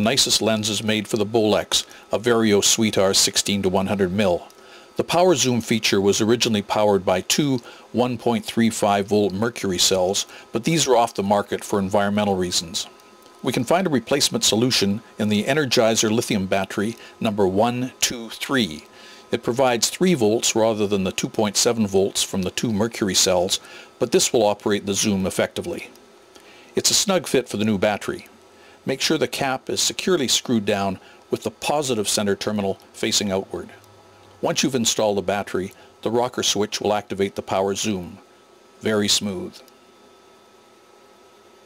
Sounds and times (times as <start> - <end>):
Speech: 0.0 - 26.0, 26.8 - 39.7.